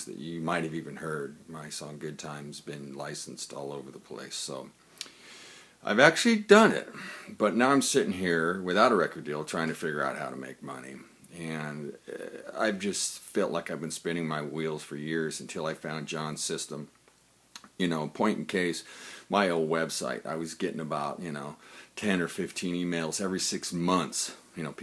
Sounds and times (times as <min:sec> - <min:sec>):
Speech: 0:00.0 - 0:04.8, 0:05.8 - 0:17.0, 0:17.6 - 0:24.8.